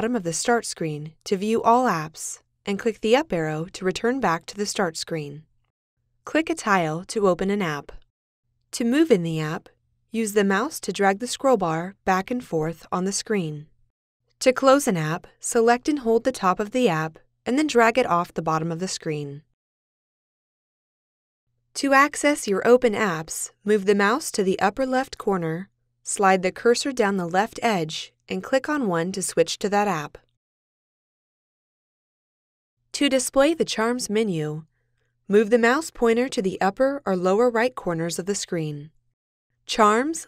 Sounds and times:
Speech: 0.0 - 5.4, 6.3 - 8.0, 8.8 - 13.7, 14.4 - 19.5, 21.8 - 30.2, 33.0 - 34.6, 35.3 - 38.9, 39.7 - 40.2.

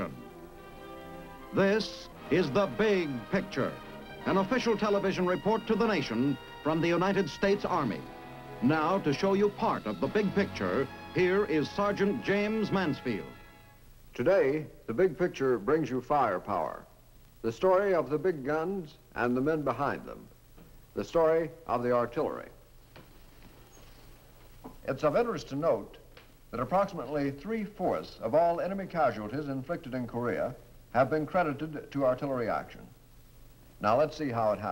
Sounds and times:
Music: 0.0 - 13.9
Speech: 1.6 - 8.0, 8.6 - 13.3, 14.2 - 20.3, 21.0 - 22.6, 24.8 - 33.0, 33.8 - 34.7.

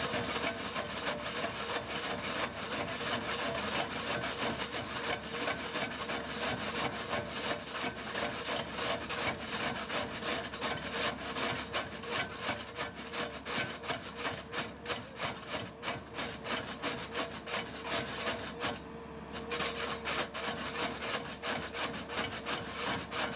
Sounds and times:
Outside, urban or manmade: 0.0 - 23.3
Vehicle: 0.0 - 23.3.

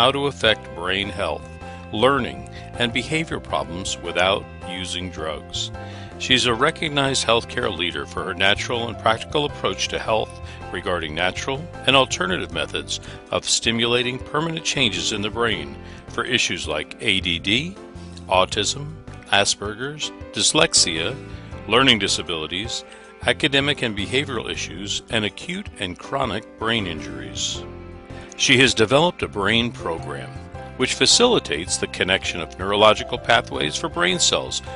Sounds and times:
Speech: 0.0 - 27.6, 28.4 - 34.7
Music: 0.0 - 34.7.

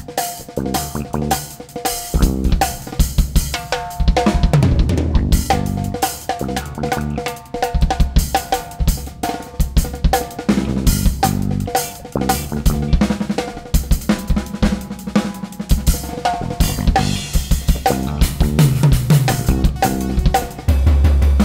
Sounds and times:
Drum: 0.0 - 21.4
Drum kit: 0.0 - 21.4.

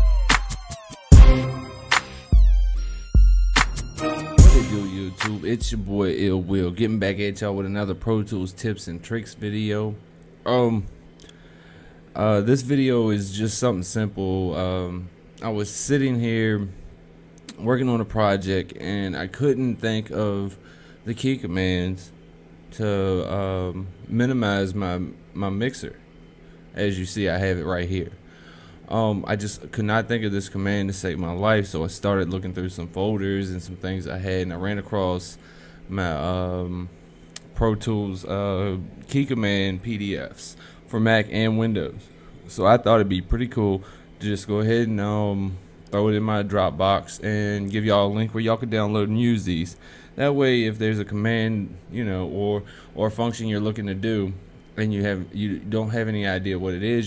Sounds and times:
Speech: 4.4 - 11.0, 12.1 - 16.8, 17.5 - 26.0, 26.7 - 28.2, 28.9 - 57.0.

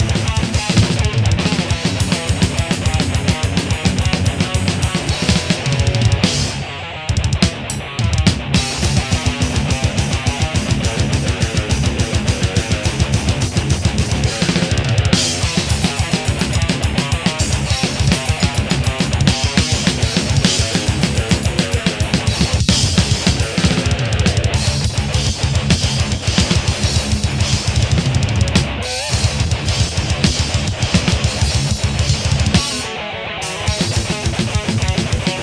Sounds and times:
Drum: 0.0 - 35.4
Drum kit: 0.0 - 35.4
Guitar: 0.0 - 35.4.

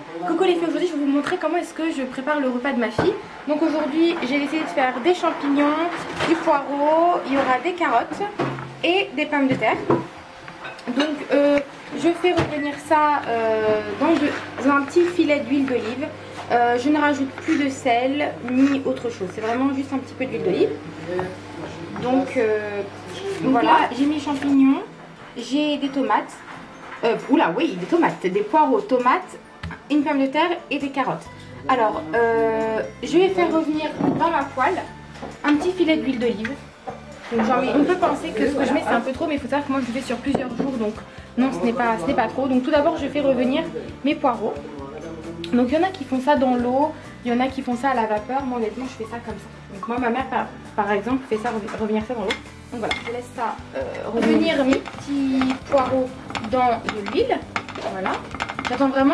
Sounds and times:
Music: 0.0 - 59.1.

